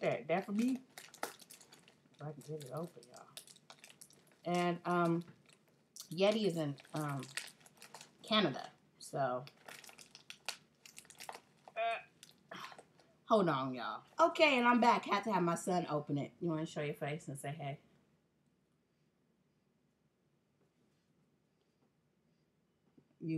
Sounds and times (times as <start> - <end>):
Speech: 0.0 - 0.8, 2.2 - 3.3, 4.5 - 5.3, 6.0 - 7.4, 8.3 - 9.5, 13.3 - 17.8
Crumpling, crinkling: 0.0 - 8.7, 9.4 - 13.1.